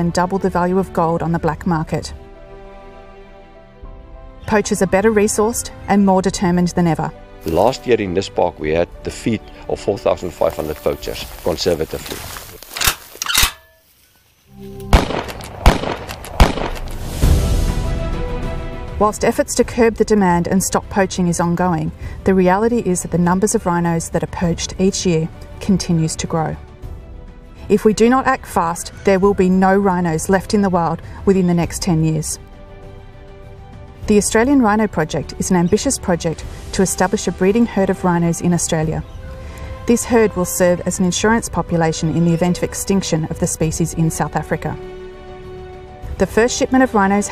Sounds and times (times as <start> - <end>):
Gunshot, gunfire: 14.9 - 17.0.